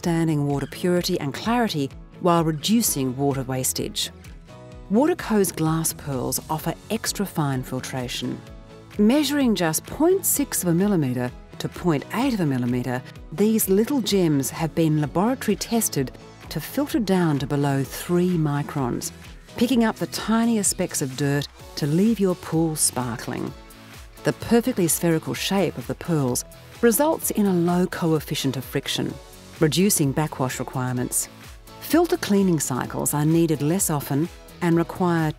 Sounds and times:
Speech: 0.0 - 4.1, 4.9 - 8.4, 9.0 - 23.6, 24.2 - 35.3
Music: 0.0 - 35.3.

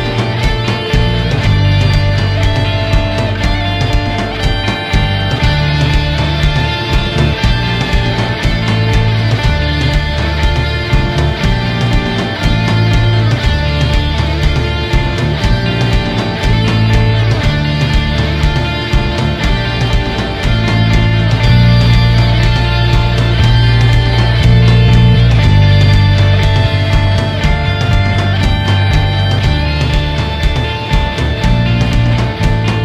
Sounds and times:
Guitar: 0.0 - 32.8
Rock music: 0.0 - 32.8.

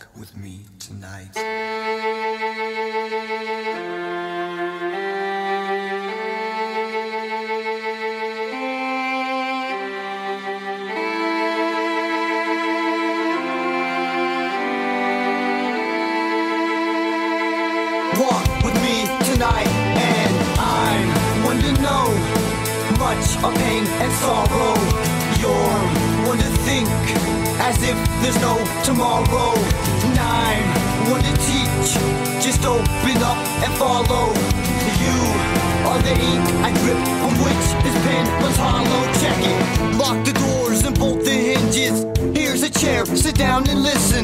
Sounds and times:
Music: 1.0 - 44.2.

